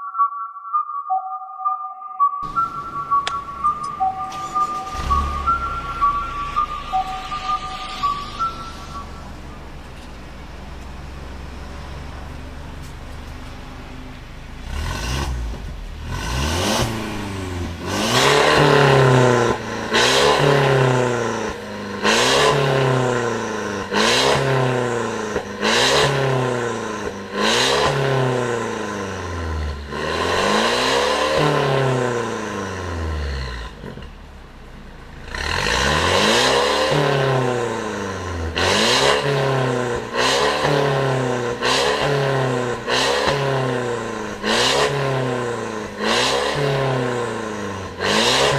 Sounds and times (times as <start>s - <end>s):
Car: 2.4s - 48.5s
Accelerating, revving, vroom: 4.6s - 9.0s, 14.6s - 34.1s, 35.2s - 48.5s.